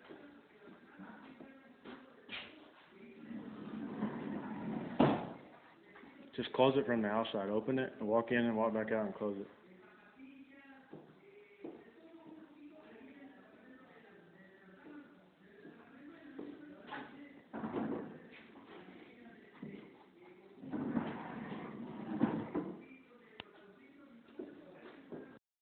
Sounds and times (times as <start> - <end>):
Sliding door: 3.3 - 5.2, 20.8 - 22.6.